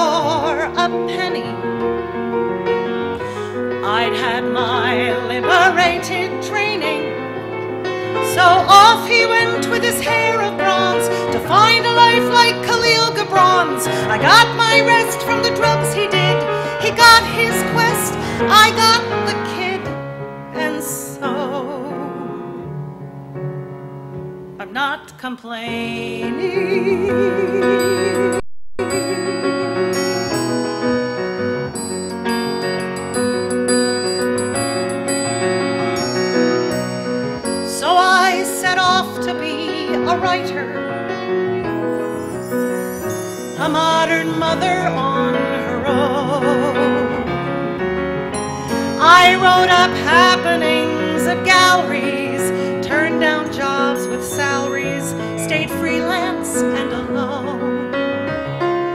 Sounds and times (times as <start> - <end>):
Music: 0.0 - 58.9.